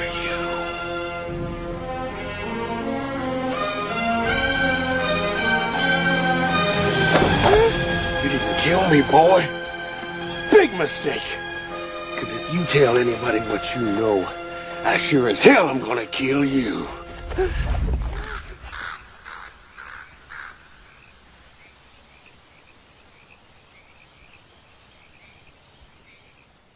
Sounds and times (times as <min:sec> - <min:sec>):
Environmental noise: 0:00.0 - 0:26.7.